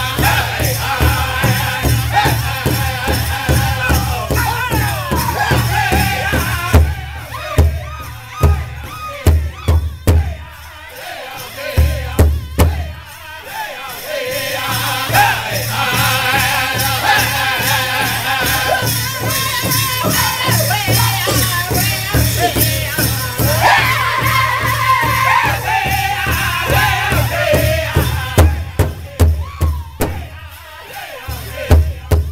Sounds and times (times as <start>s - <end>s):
Music: 0.0s - 32.3s.